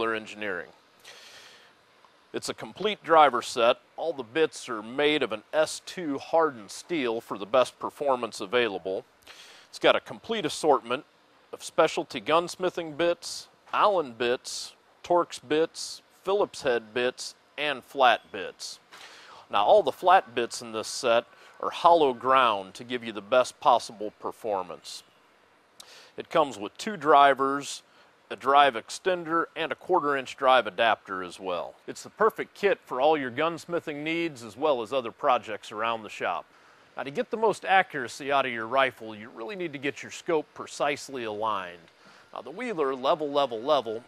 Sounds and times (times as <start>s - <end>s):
Speech: 0.0s - 0.8s, 2.4s - 9.0s, 9.7s - 11.0s, 11.6s - 18.8s, 19.5s - 25.0s, 26.2s - 44.0s.